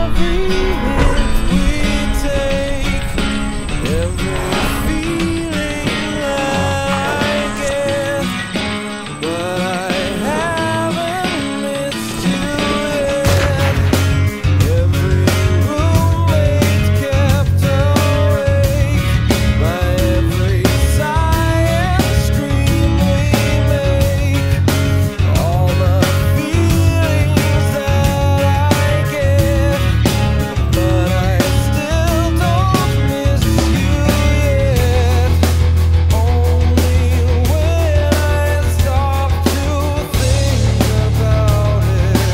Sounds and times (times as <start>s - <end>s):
Acoustic guitar: 0.0s - 42.3s.